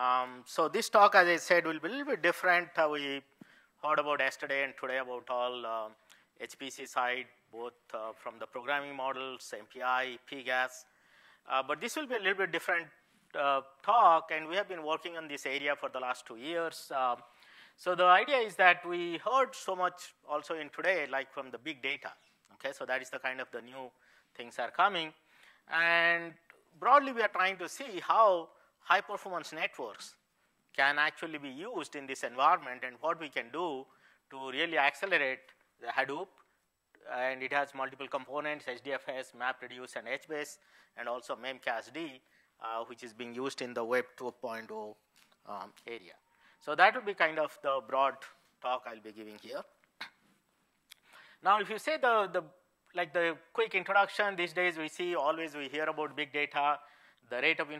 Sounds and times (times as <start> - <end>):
Speech: 0.0 - 10.9, 11.5 - 30.2, 30.8 - 36.4, 37.0 - 49.8, 51.4 - 57.7.